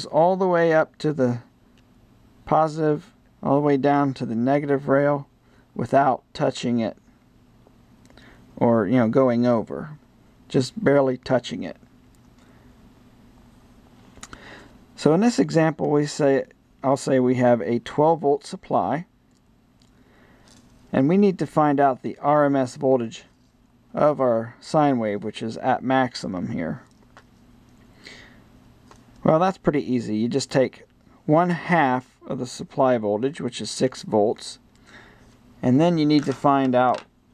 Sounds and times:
Speech: 0:00.0 - 0:01.5, 0:02.4 - 0:07.0, 0:08.6 - 0:11.9, 0:15.0 - 0:19.1, 0:20.9 - 0:26.9, 0:29.2 - 0:34.6, 0:35.6 - 0:37.1
Inside, small room: 0:00.0 - 0:37.3.

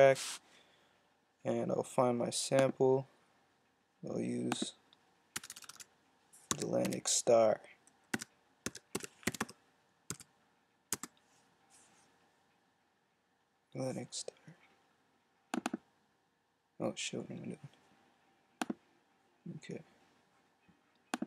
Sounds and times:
Speech: 0:00.0 - 0:00.2, 0:01.4 - 0:03.1, 0:04.0 - 0:04.8, 0:06.6 - 0:07.7, 0:13.8 - 0:14.5, 0:16.8 - 0:17.7, 0:19.4 - 0:20.0.

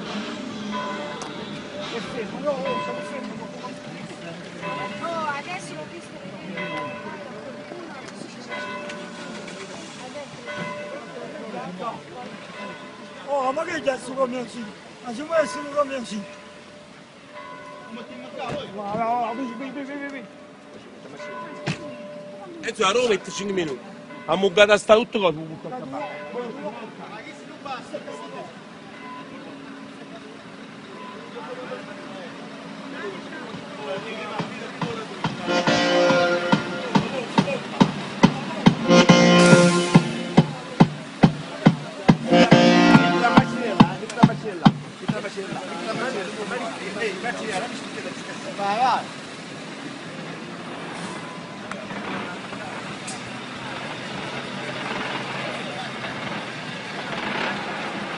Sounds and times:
Vehicle: 0:00.0 - 0:58.1
Speech: 0:17.9 - 0:35.6, 0:36.5 - 0:38.9, 0:40.2 - 0:49.2.

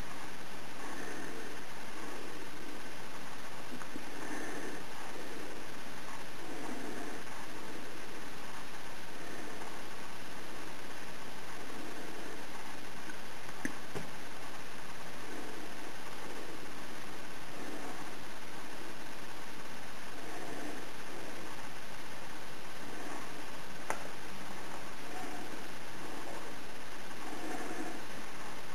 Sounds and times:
Inside, small room: 0:00.0 - 0:28.7.

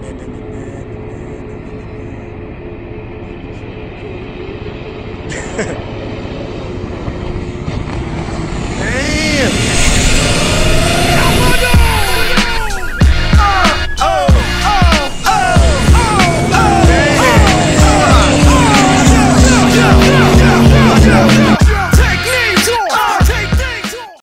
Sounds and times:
Motorboat, speedboat: 0:00.0 - 0:08.9, 0:16.2 - 0:21.5.

